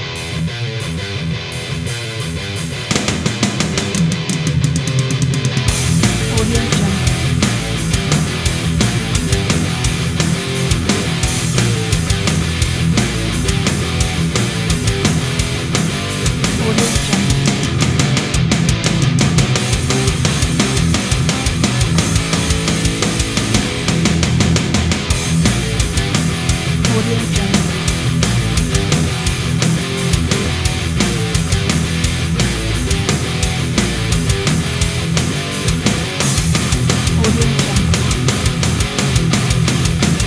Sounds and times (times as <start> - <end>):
Heavy metal: 0.0 - 40.2.